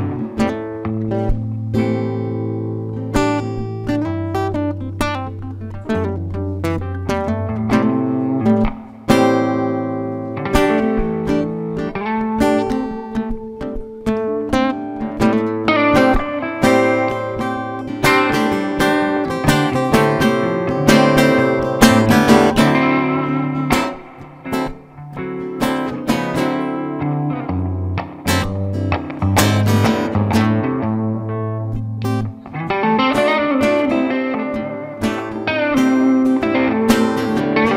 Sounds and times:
Music: 0.0 - 37.7.

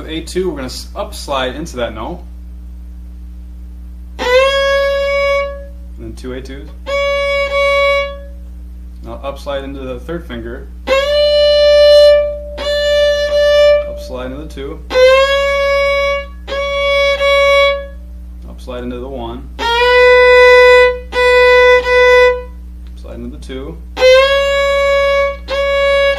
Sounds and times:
Speech: 0.0 - 2.3, 6.0 - 6.8, 9.0 - 10.7, 13.9 - 14.9, 18.4 - 19.6, 23.0 - 23.8
Violin, fiddle: 4.2 - 5.7, 6.8 - 8.3, 10.9 - 18.0, 19.6 - 22.5, 24.0 - 26.1.

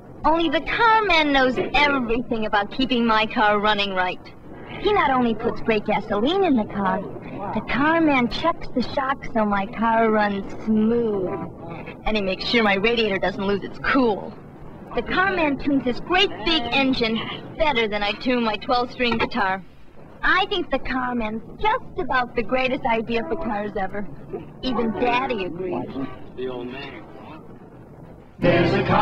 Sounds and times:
Speech: 0.3 - 14.4, 15.0 - 19.6, 20.2 - 27.0.

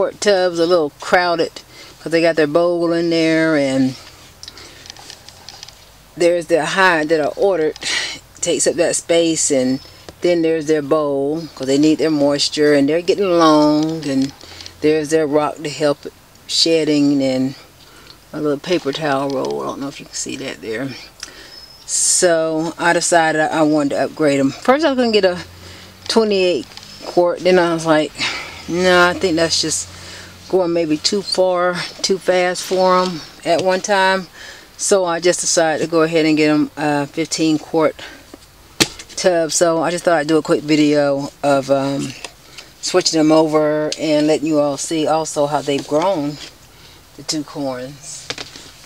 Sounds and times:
Speech: 0.0 - 4.1, 6.2 - 17.7, 18.3 - 21.1, 21.9 - 25.5, 26.1 - 29.9, 30.5 - 38.2, 39.2 - 46.5, 47.2 - 48.3.

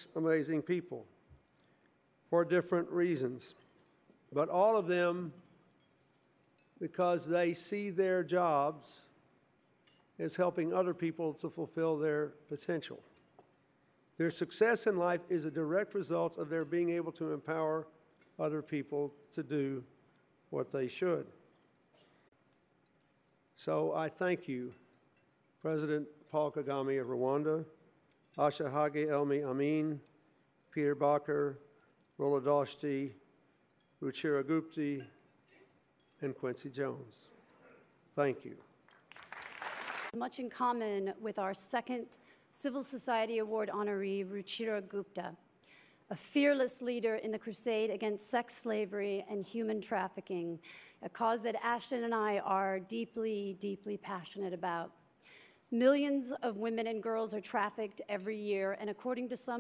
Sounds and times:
Male speech, man speaking: 0.0 - 1.1, 2.3 - 3.6, 4.3 - 5.4, 6.8 - 9.1, 10.2 - 13.0, 14.2 - 19.9, 20.5 - 21.4, 23.6 - 24.8, 25.6 - 27.8, 28.4 - 30.1, 30.8 - 31.6, 32.2 - 33.2, 34.0 - 35.1, 36.2 - 37.4, 38.2 - 38.7
Narration, monologue: 0.0 - 59.6.

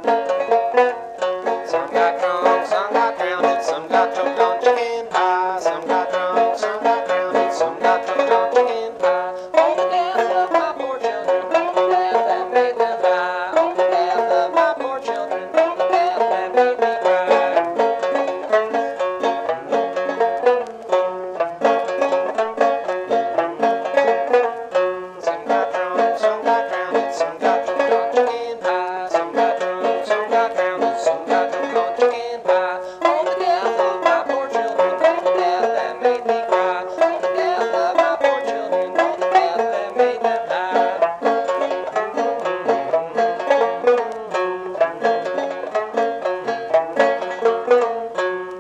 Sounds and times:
Banjo: 0.0 - 48.6.

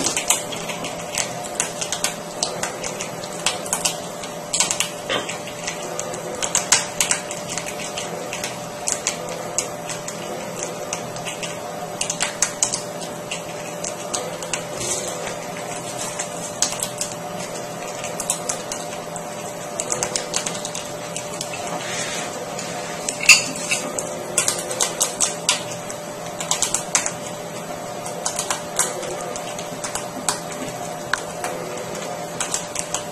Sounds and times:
Patter: 0.0 - 33.1.

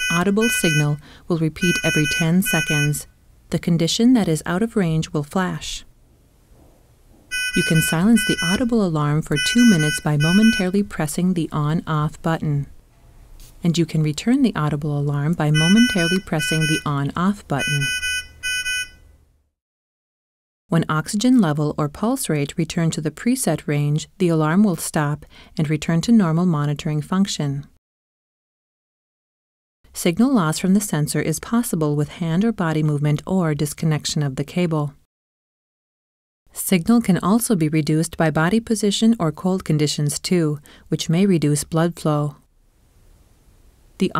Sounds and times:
Speech: 0.0 - 5.9, 7.6 - 12.8, 13.6 - 17.9, 20.7 - 27.7, 30.0 - 35.0, 36.5 - 42.4.

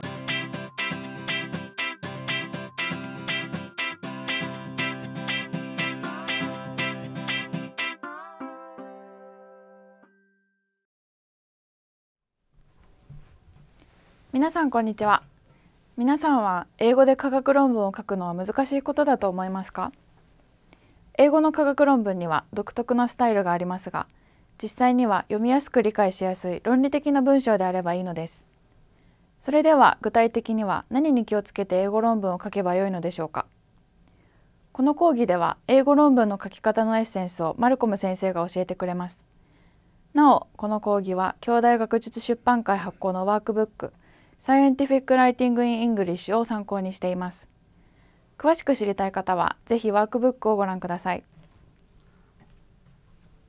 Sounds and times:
Speech: 14.3 - 15.3, 16.0 - 20.0, 21.2 - 28.4, 29.4 - 33.5, 34.8 - 39.2, 40.2 - 47.5, 48.4 - 51.3.

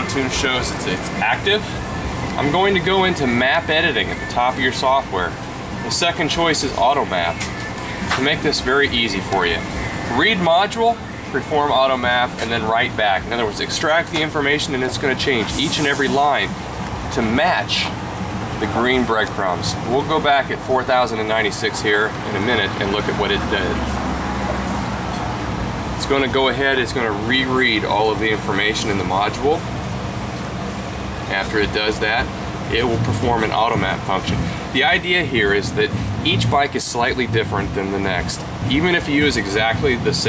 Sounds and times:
Speech: 0.0 - 18.0, 18.6 - 23.9, 26.0 - 29.7, 31.2 - 40.2.

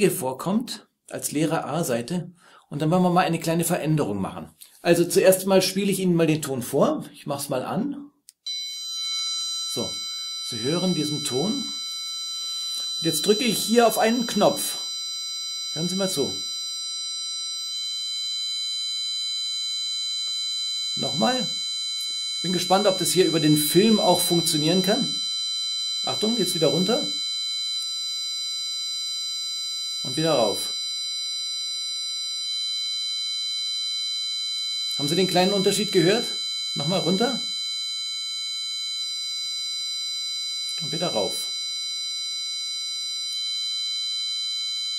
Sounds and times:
Speech: 0.0 - 8.1, 9.8 - 11.8, 13.0 - 14.8, 15.8 - 16.4, 21.0 - 21.6, 22.5 - 25.2, 26.1 - 27.2, 30.1 - 30.7, 35.0 - 37.5, 40.8 - 41.5.

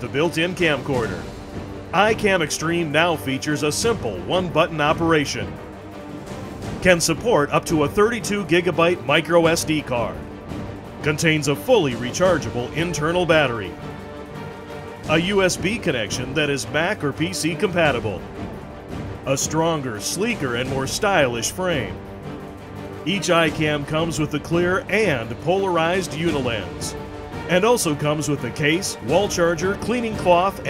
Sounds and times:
Speech: 0.0 - 1.3, 2.0 - 5.6, 6.8 - 10.2, 11.0 - 13.8, 15.1 - 18.2, 19.3 - 22.0, 23.1 - 30.6
Music: 0.0 - 30.6.

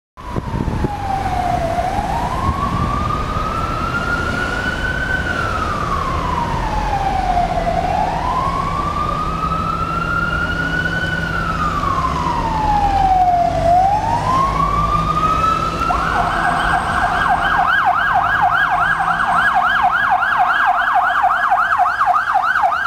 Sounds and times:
Car: 0.2 - 22.8
Emergency vehicle: 0.2 - 22.8
Siren: 0.2 - 22.8.

